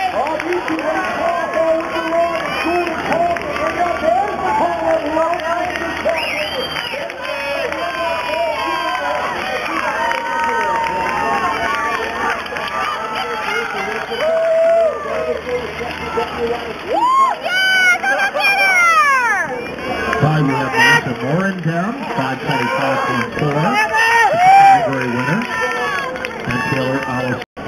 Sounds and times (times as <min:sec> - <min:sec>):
Crowd: 0:00.0 - 0:27.6.